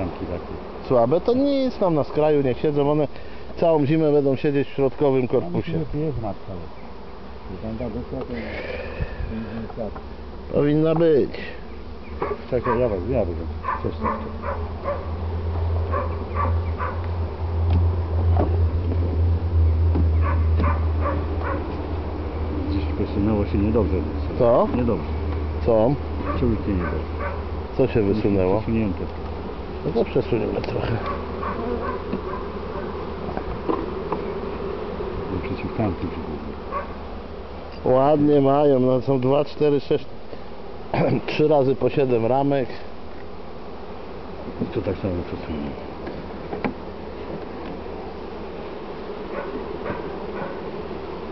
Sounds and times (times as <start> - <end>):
Speech: 7.5 - 8.6, 12.5 - 14.3, 29.8 - 31.0, 35.3 - 36.4, 37.8 - 40.1, 41.1 - 42.9, 44.6 - 45.8
Animal: 12.1 - 13.0, 13.6 - 15.1, 15.9 - 17.1, 20.2 - 21.8, 26.2 - 27.4, 30.9 - 33.1, 49.3 - 50.7.